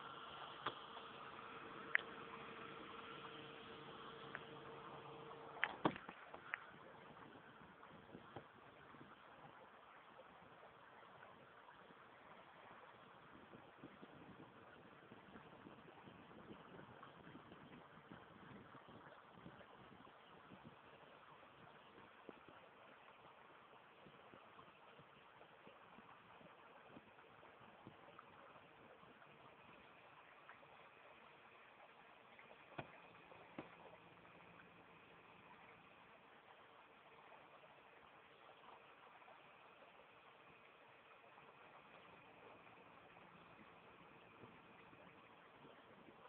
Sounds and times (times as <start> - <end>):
Rowboat, canoe, kayak: 0.0 - 46.2.